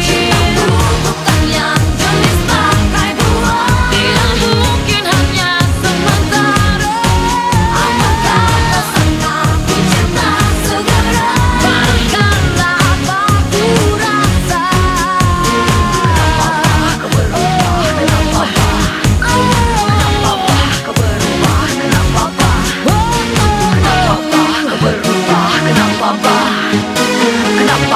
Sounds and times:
Pop music: 0.0s - 27.9s.

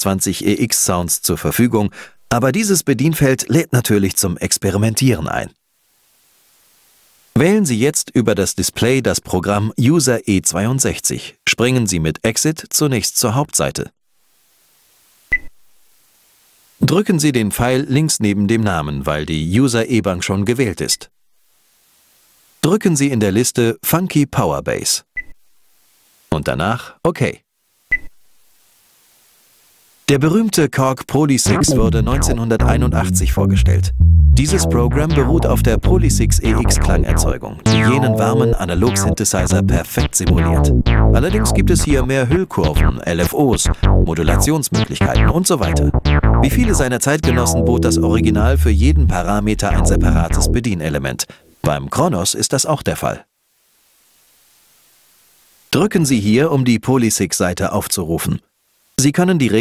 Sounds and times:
Speech: 0.0s - 5.6s, 7.4s - 14.0s, 16.8s - 21.1s, 22.6s - 25.1s, 26.3s - 27.5s, 30.1s - 53.3s, 55.7s - 59.6s.

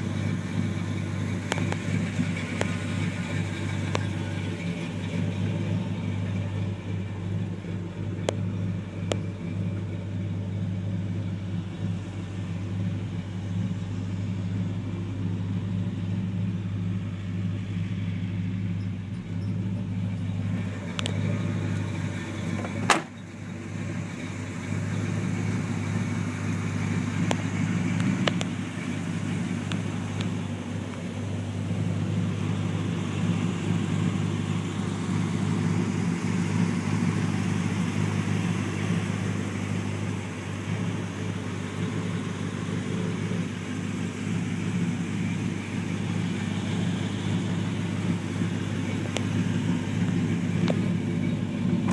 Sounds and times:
Vehicle: 0.0s - 51.9s.

